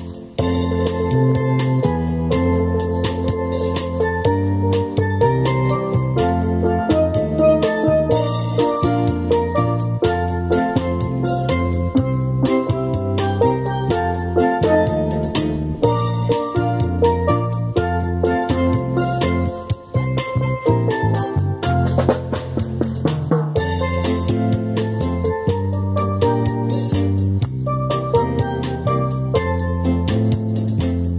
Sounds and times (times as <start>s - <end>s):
Musical instrument: 0.0s - 31.1s.